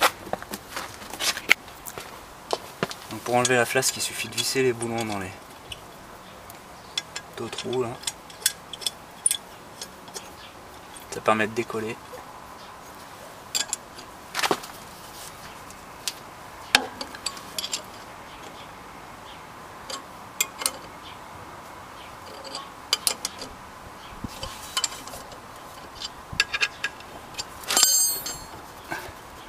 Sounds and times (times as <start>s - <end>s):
Speech: 3.1s - 5.4s, 7.4s - 8.0s, 11.1s - 12.0s.